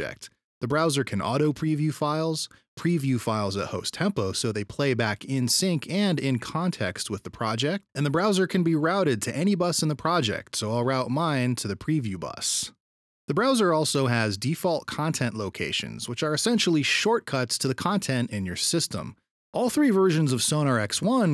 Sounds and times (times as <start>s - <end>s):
Speech: 0.0s - 21.3s.